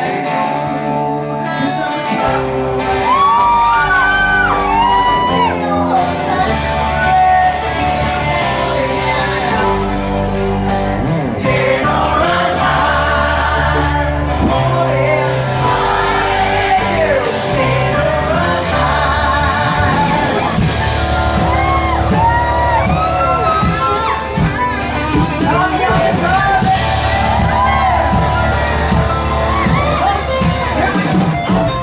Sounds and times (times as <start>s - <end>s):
Singing: 0.0s - 10.5s, 11.4s - 24.4s, 25.0s - 31.8s
Inside, large room or hall: 0.0s - 31.8s
Music: 0.0s - 31.8s
Shout: 2.9s - 6.1s, 21.0s - 24.4s, 27.0s - 30.4s.